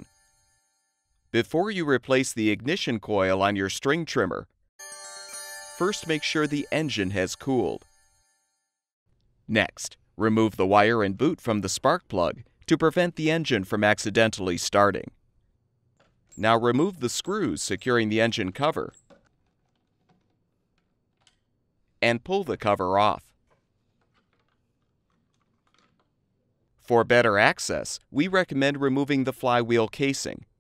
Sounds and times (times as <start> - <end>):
Speech: 1.4 - 4.5, 5.8 - 7.8, 9.5 - 15.2, 16.4 - 18.9, 22.0 - 23.3, 26.9 - 30.5.